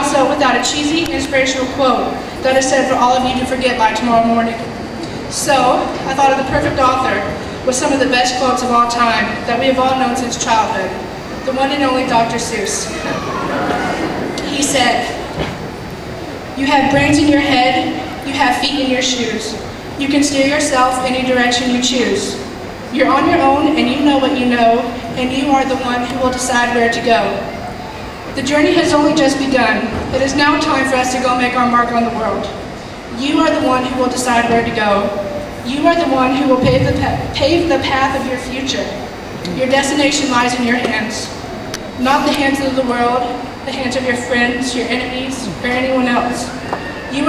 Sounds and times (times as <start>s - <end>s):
Speech: 0.0s - 4.7s, 5.3s - 15.2s, 16.6s - 27.6s, 33.2s - 41.4s, 42.0s - 47.2s
Crowd: 0.0s - 47.2s
Inside, large room or hall: 0.0s - 47.2s.